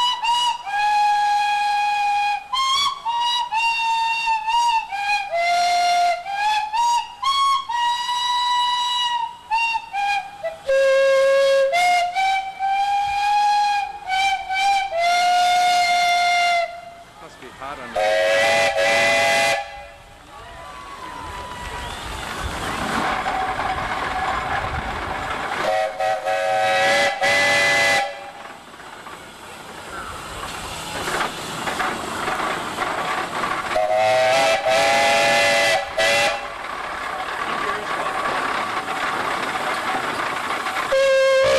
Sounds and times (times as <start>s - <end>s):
Steam whistle: 0.0s - 17.0s, 18.0s - 20.0s, 25.6s - 28.4s, 33.7s - 36.6s, 40.9s - 41.5s.